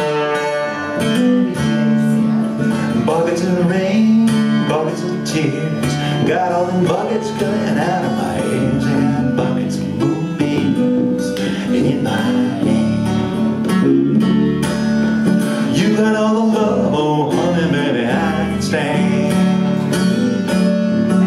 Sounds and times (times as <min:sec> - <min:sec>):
Music: 0:00.0 - 0:21.2.